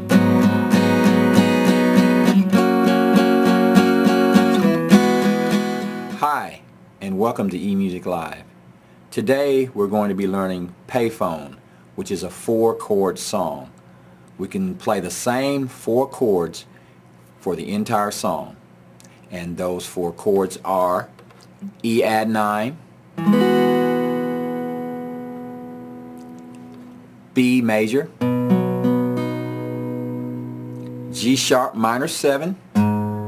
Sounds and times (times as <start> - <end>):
Acoustic guitar: 0.0 - 6.6, 23.2 - 33.2
Speech: 6.2 - 8.5, 9.1 - 13.8, 14.4 - 16.7, 17.4 - 18.6, 19.3 - 22.8, 27.4 - 28.2, 31.2 - 32.6.